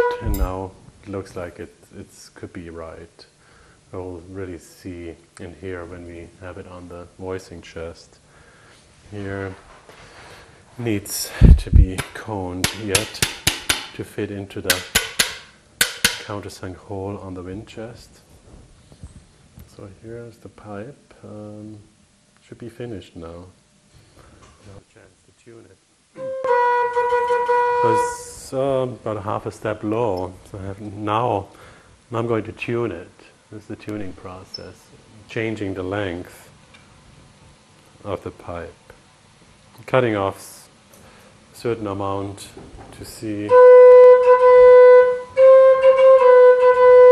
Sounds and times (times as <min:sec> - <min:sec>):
Speech: 0:00.2 - 0:03.3, 0:03.9 - 0:08.2, 0:09.1 - 0:09.7, 0:10.8 - 0:13.3, 0:13.9 - 0:14.9, 0:16.2 - 0:18.3, 0:19.7 - 0:23.6, 0:24.6 - 0:25.8, 0:27.8 - 0:31.5, 0:32.1 - 0:36.6, 0:38.0 - 0:39.0, 0:39.8 - 0:40.8, 0:41.5 - 0:43.6.